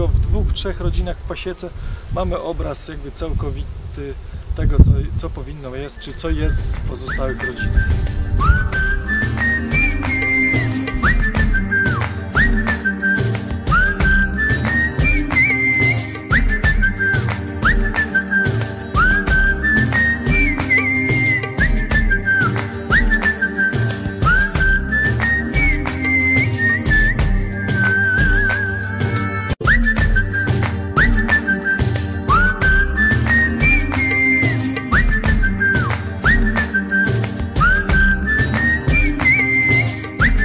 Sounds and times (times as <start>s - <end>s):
Music: 6.6s - 40.4s.